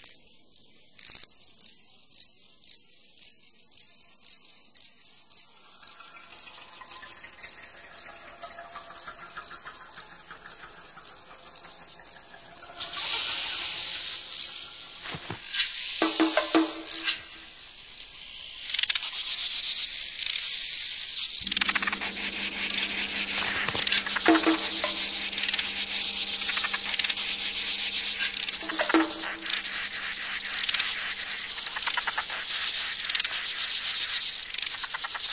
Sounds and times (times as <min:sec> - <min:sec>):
Insect: 0:00.0 - 0:35.3
Music: 0:05.4 - 0:19.1, 0:21.3 - 0:35.3.